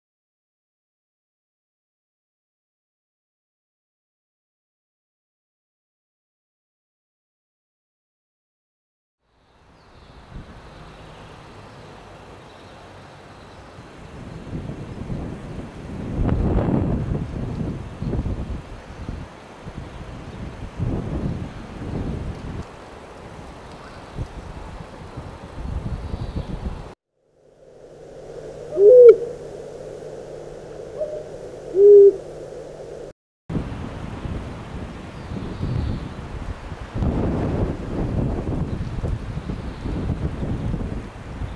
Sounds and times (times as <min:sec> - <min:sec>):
Hoot: 0:28.2 - 0:33.1.